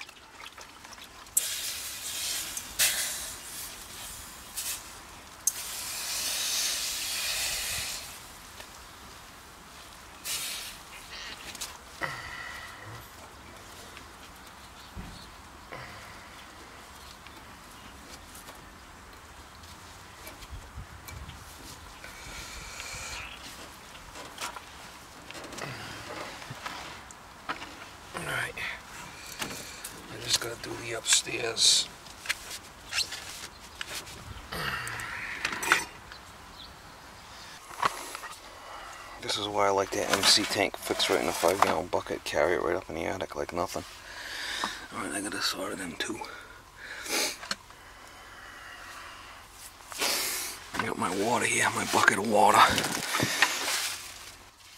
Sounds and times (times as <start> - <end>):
Hiss: 1.4 - 8.3, 10.2 - 10.9, 50.0 - 50.6.